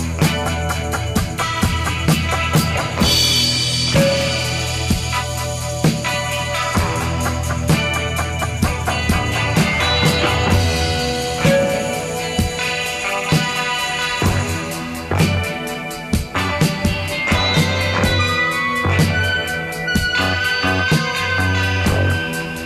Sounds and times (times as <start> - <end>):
Music: 0.0 - 22.6.